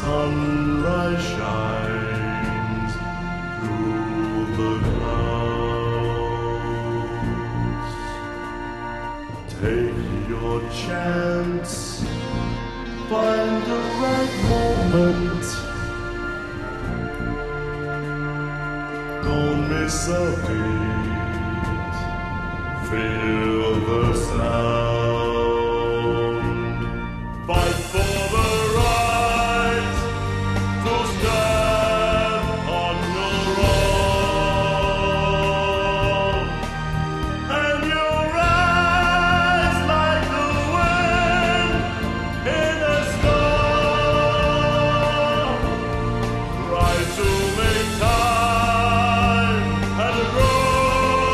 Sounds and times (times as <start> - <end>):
Pop music: 0.0 - 51.3.